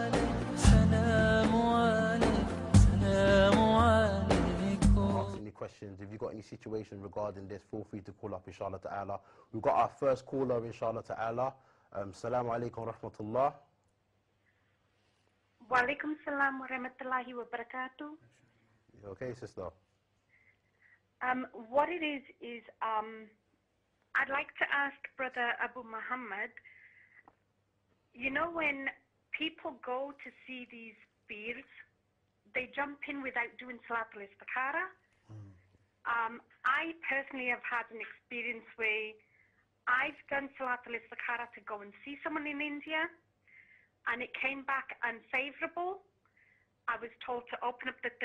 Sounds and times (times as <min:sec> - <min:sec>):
Speech: 0:05.3 - 0:13.6, 0:15.6 - 0:18.2, 0:19.0 - 0:19.8, 0:32.6 - 0:39.2, 0:39.9 - 0:43.2, 0:46.9 - 0:48.2.